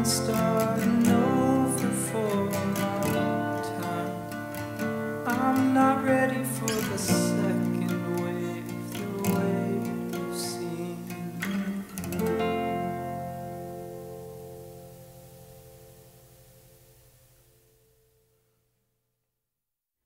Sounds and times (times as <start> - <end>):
Strum: 0.0 - 17.7.